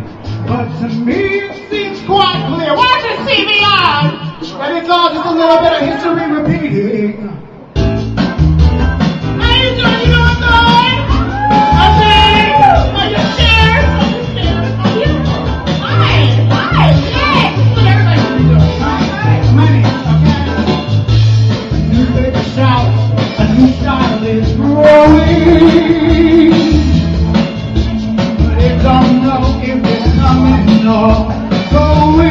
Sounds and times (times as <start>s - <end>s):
Music: 0.0s - 32.3s.